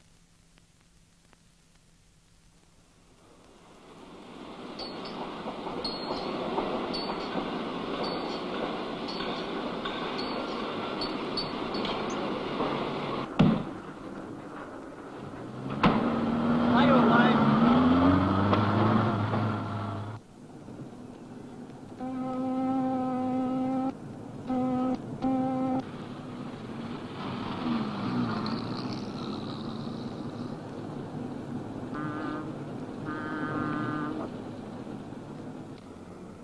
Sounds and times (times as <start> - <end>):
Speech: 16.7 - 17.5.